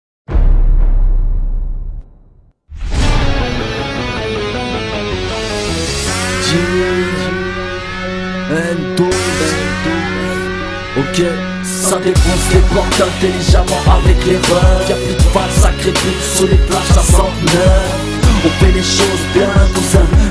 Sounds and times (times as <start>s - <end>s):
Exciting music: 0.3s - 20.3s
Pop music: 3.3s - 20.3s.